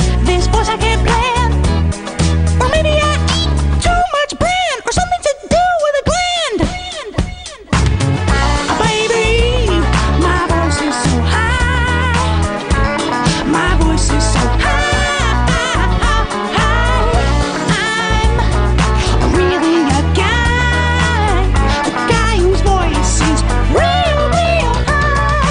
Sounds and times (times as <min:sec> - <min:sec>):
Music: 0:00.0 - 0:25.5.